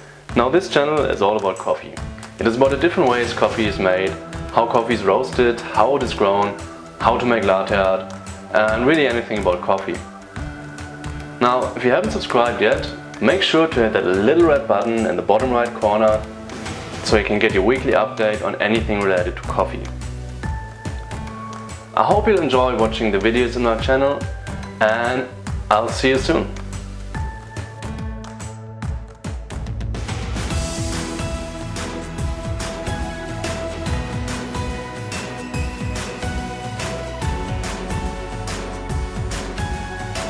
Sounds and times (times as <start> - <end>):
Music: 0.0 - 40.2
Speech: 0.3 - 10.1, 11.4 - 16.2, 17.0 - 19.9, 22.0 - 26.6.